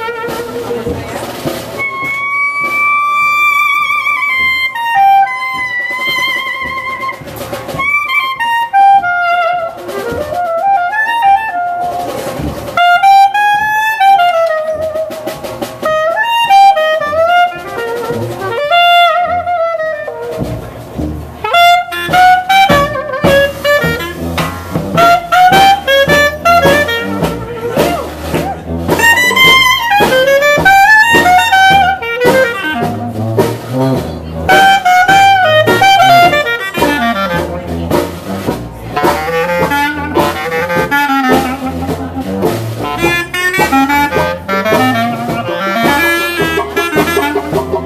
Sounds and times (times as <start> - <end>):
Brass instrument: 0.0 - 47.8
Jazz: 0.0 - 47.8
Orchestra: 0.0 - 47.8
Wind instrument, woodwind instrument: 0.0 - 47.8.